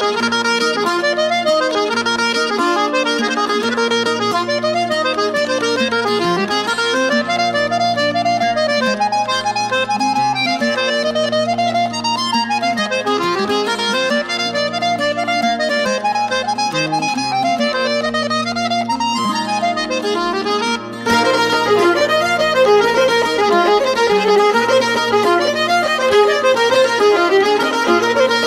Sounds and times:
Harmonica: 0.0s - 28.4s.

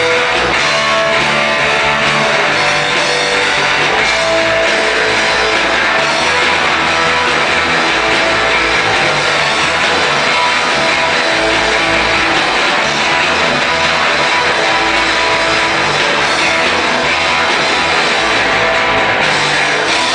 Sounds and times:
Music: 0.0s - 20.1s.

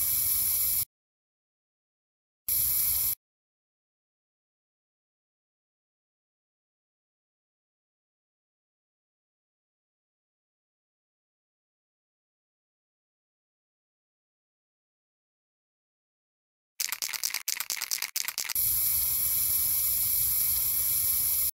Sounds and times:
Spray: 0.0s - 0.9s, 2.5s - 3.2s, 16.8s - 21.5s.

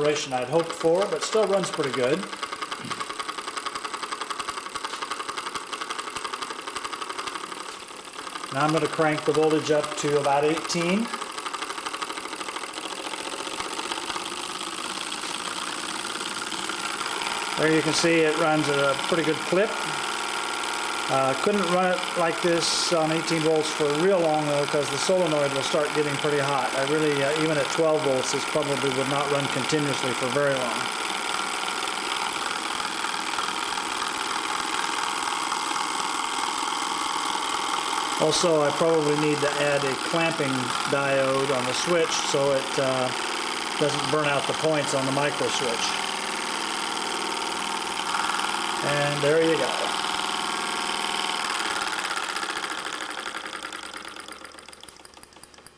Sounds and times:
Speech: 0.0s - 2.3s, 8.6s - 11.2s, 17.6s - 19.8s, 21.1s - 30.9s, 38.2s - 43.2s, 43.8s - 46.0s, 48.8s - 49.9s
Engine: 0.0s - 55.7s.

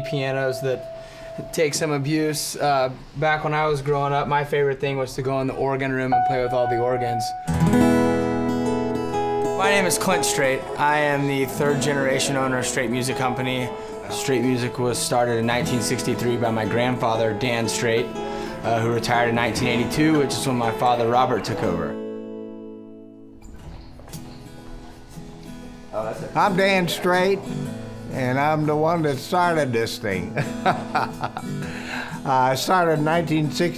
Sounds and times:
Speech: 0.0s - 0.8s, 1.5s - 7.4s, 9.6s - 22.0s, 26.0s - 27.5s, 28.1s - 30.4s, 32.3s - 33.7s
Music: 0.0s - 2.1s, 6.0s - 33.7s.

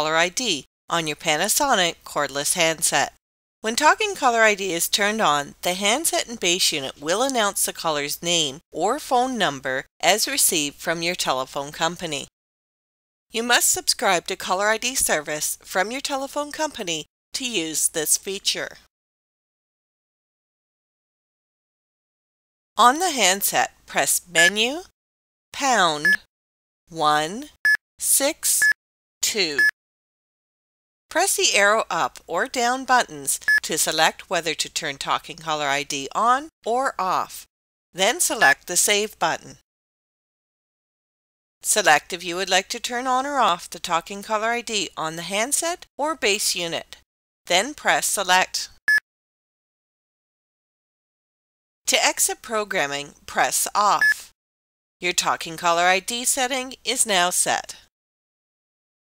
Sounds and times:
Speech: 0.0s - 12.3s, 13.4s - 18.9s, 22.8s - 24.9s, 25.6s - 26.2s, 26.9s - 29.7s, 31.1s - 39.6s, 41.6s - 48.8s, 51.9s - 54.3s, 55.0s - 57.9s.

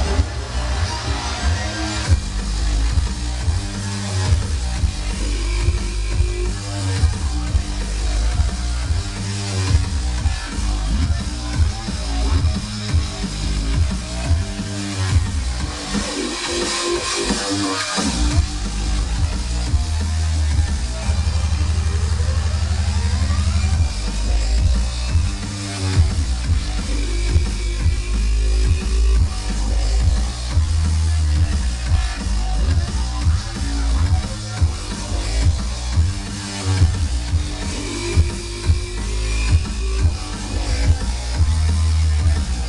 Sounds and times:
Disco: 0.0s - 42.6s.

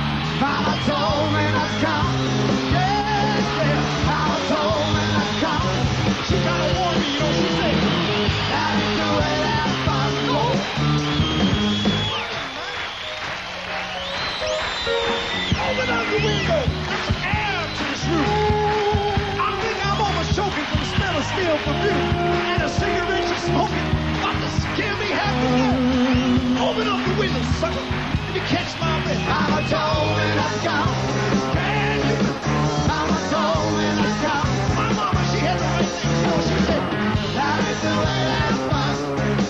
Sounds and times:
Music: 0.0s - 39.5s.

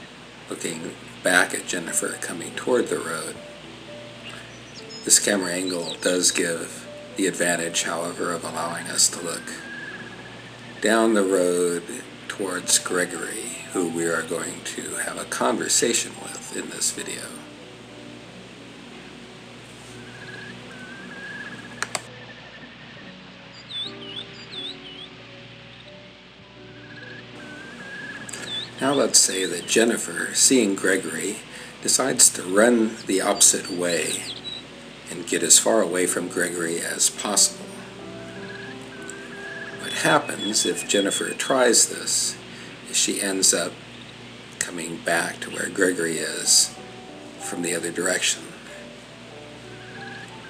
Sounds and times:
Music: 0.0s - 50.4s
Speech: 0.5s - 3.4s, 5.0s - 9.6s, 10.8s - 17.5s, 28.4s - 34.3s, 35.1s - 37.8s, 39.8s - 43.8s, 44.6s - 46.8s, 47.4s - 48.7s.

